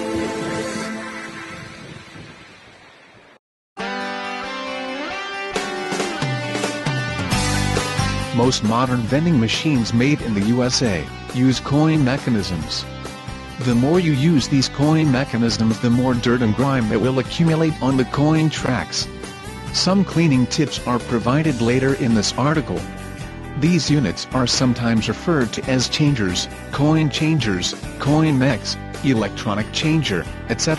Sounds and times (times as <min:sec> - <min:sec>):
Music: 0:00.0 - 0:02.6, 0:03.8 - 0:30.7
Speech: 0:08.3 - 0:12.9, 0:13.6 - 0:19.1, 0:19.7 - 0:22.8, 0:23.6 - 0:30.7.